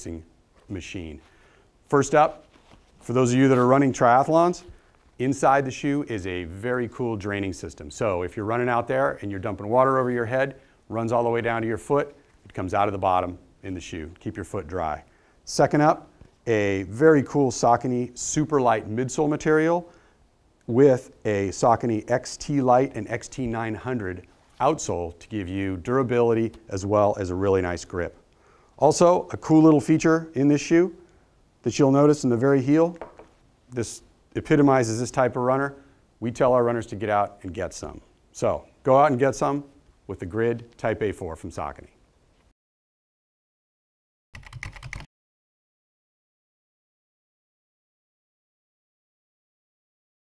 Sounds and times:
Speech: 0:00.0 - 0:01.3, 0:01.9 - 0:02.4, 0:03.0 - 0:19.9, 0:20.7 - 0:28.2, 0:28.8 - 0:31.0, 0:31.6 - 0:33.0, 0:33.7 - 0:42.0
Computer keyboard: 0:44.4 - 0:45.1.

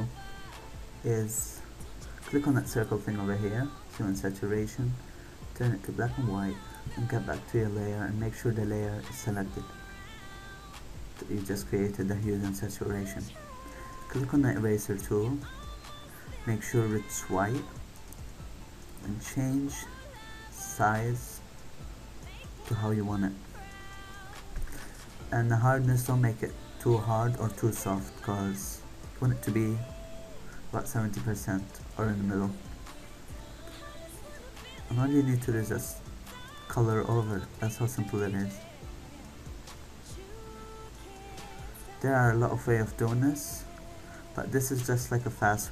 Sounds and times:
Music: 0:00.0 - 0:45.7
Speech: 0:01.0 - 0:01.6, 0:02.2 - 0:05.0, 0:05.6 - 0:09.7, 0:11.2 - 0:13.4, 0:14.1 - 0:15.5, 0:16.4 - 0:17.8, 0:19.0 - 0:19.9, 0:20.5 - 0:21.4, 0:22.7 - 0:23.4, 0:25.3 - 0:30.0, 0:30.7 - 0:32.6, 0:34.6 - 0:36.0, 0:36.7 - 0:38.7, 0:41.9 - 0:43.7, 0:44.4 - 0:45.7.

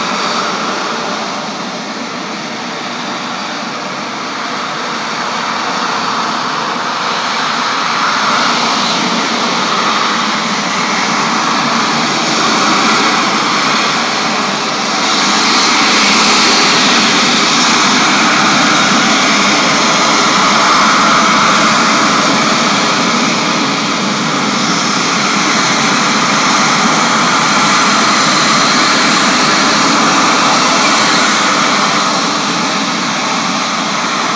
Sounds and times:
Outside, urban or manmade: 0:00.0 - 0:34.3
Vehicle: 0:00.0 - 0:34.3.

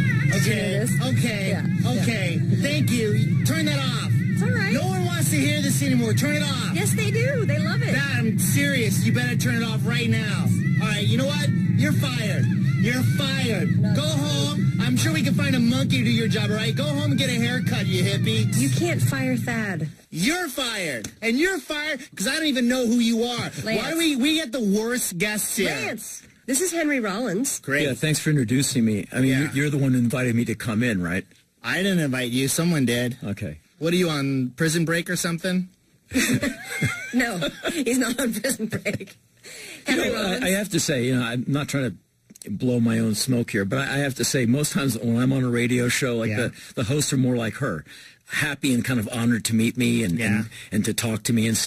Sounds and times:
Speech: 0:00.3 - 0:35.7, 0:37.2 - 0:39.1, 0:39.8 - 0:51.6.

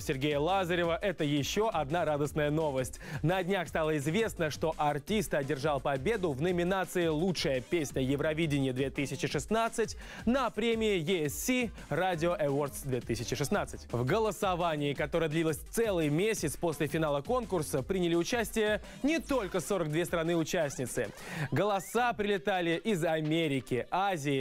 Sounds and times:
Speech: 0:00.0 - 0:24.4.

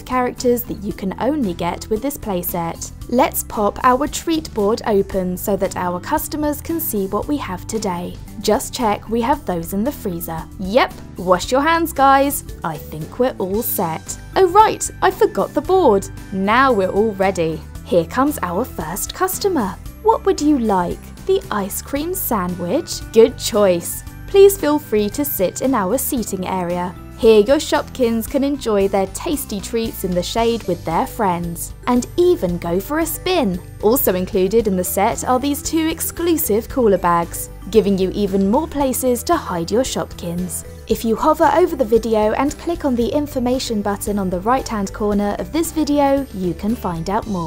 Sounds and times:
Music: 0:00.0 - 0:47.4
Speech: 0:00.0 - 0:47.4.

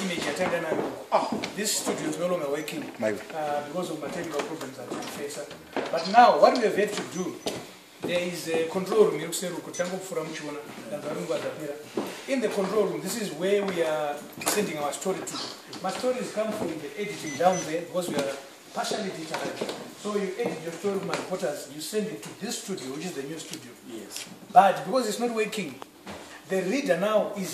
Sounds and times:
Male speech, man speaking: 0:00.0 - 0:25.8, 0:26.5 - 0:27.5.

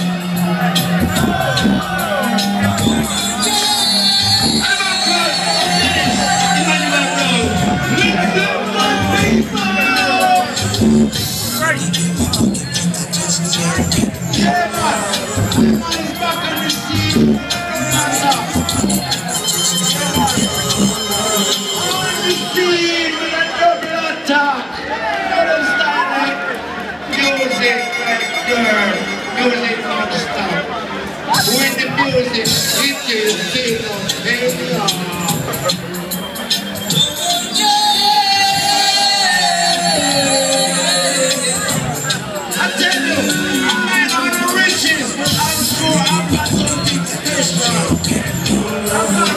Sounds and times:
Music: 0:00.0 - 0:49.3
Speech: 0:04.5 - 0:12.6, 0:13.3 - 0:36.1, 0:37.6 - 0:49.3.

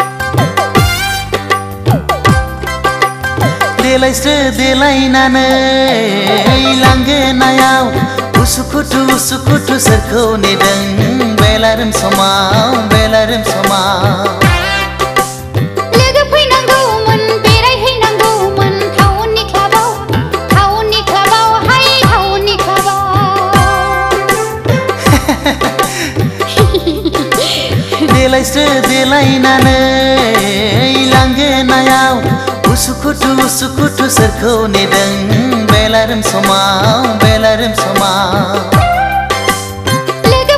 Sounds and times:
Music: 0:00.0 - 0:40.5.

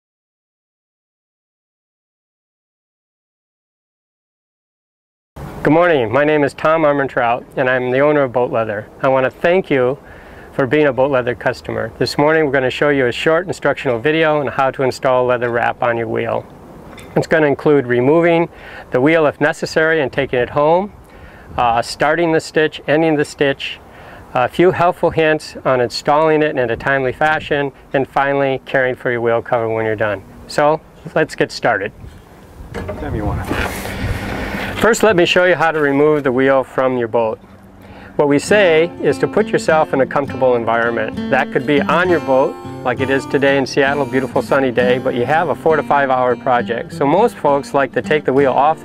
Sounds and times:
Speech: 0:05.6 - 0:16.5, 0:17.2 - 0:21.0, 0:21.6 - 0:23.8, 0:24.4 - 0:32.0, 0:32.8 - 0:33.6, 0:34.8 - 0:37.4, 0:38.2 - 0:48.8
Music: 0:38.2 - 0:48.8.

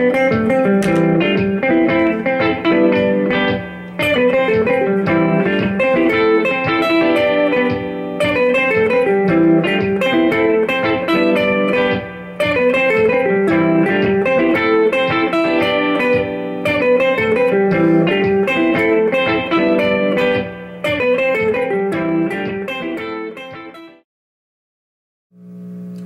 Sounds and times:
Music: 0:00.0 - 0:24.1.

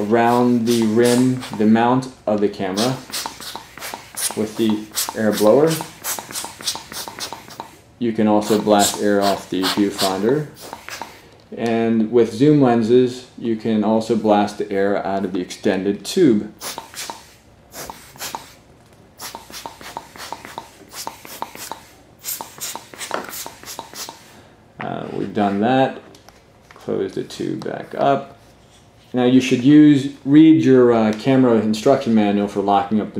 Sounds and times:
Speech: 0:00.0 - 0:03.1, 0:04.3 - 0:05.9, 0:08.0 - 0:10.6, 0:11.5 - 0:16.5, 0:24.8 - 0:26.1, 0:26.8 - 0:28.4, 0:29.1 - 0:33.1.

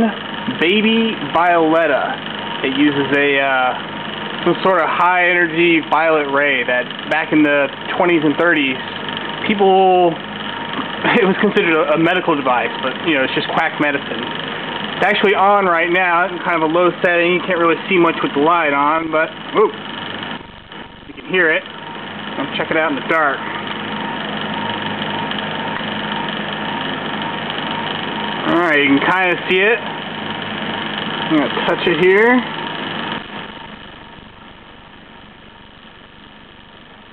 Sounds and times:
Speech: 0:00.0 - 0:03.8, 0:04.4 - 0:10.2, 0:11.1 - 0:14.3, 0:15.0 - 0:19.8, 0:21.1 - 0:21.6, 0:22.4 - 0:23.5, 0:28.4 - 0:29.9, 0:31.3 - 0:32.5.

